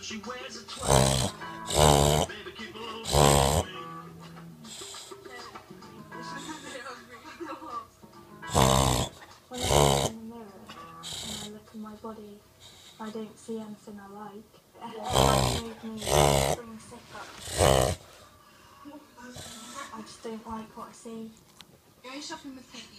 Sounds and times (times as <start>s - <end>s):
Music: 0.0s - 12.4s
Dog: 0.8s - 2.3s, 3.0s - 3.7s, 8.5s - 11.6s, 15.0s - 16.6s, 17.3s - 18.3s.